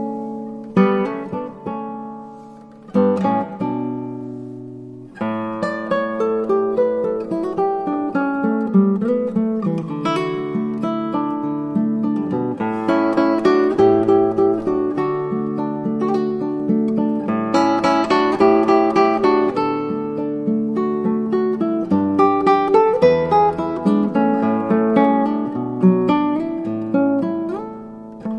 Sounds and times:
Acoustic guitar: 0.0s - 28.3s.

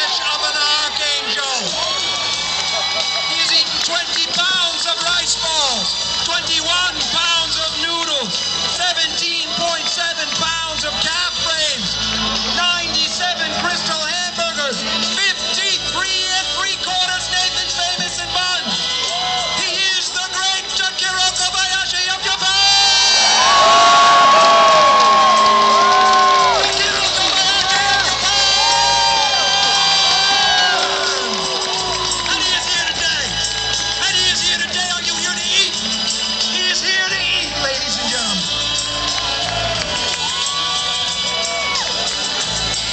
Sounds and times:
Speech: 0.0s - 1.8s, 3.3s - 11.9s, 12.6s - 18.7s, 19.6s - 22.7s, 34.0s - 35.8s, 36.6s - 38.5s
Music: 0.0s - 42.9s.

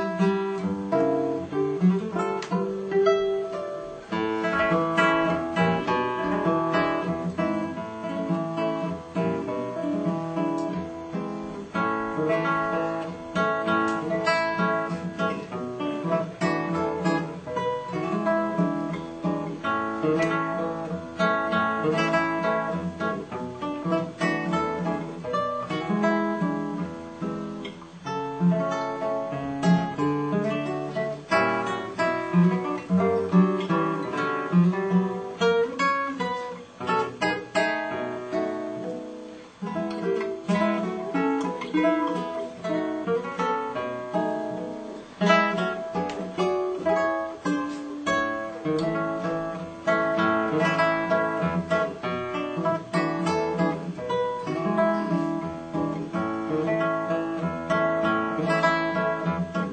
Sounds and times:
Acoustic guitar: 0.0s - 59.7s
Strum: 0.0s - 59.7s.

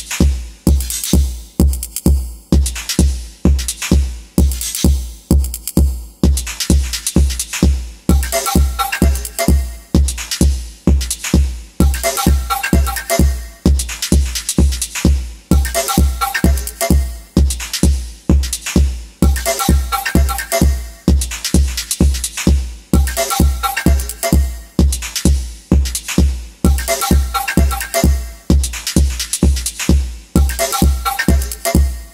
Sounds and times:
Techno: 0.0s - 32.1s.

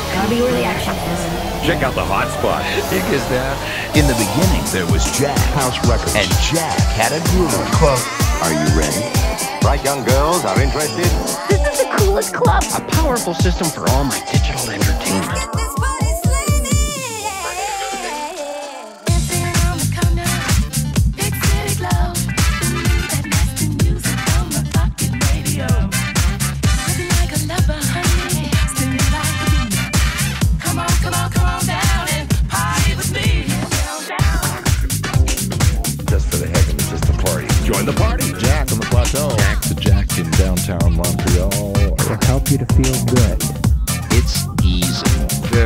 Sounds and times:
Speech: 0.0s - 15.4s, 17.3s - 18.3s, 36.1s - 43.5s, 44.1s - 45.6s
Disco: 0.0s - 45.6s.

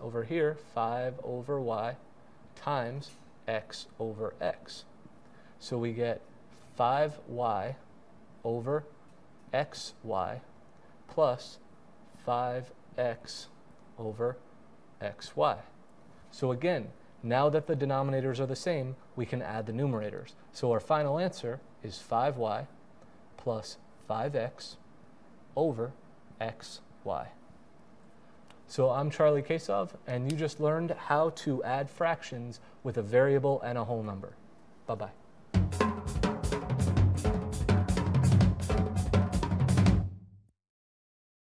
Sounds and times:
Drum: 35.5s - 40.3s
Hi-hat: 35.6s - 39.9s.

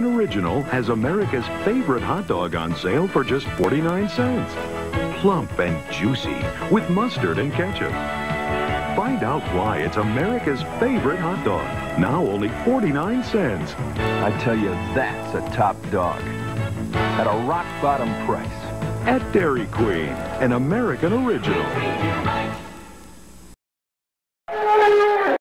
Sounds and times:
Speech: 0.0s - 4.6s, 5.2s - 8.0s, 8.9s - 16.3s, 17.1s - 22.1s
Music: 0.0s - 23.6s.

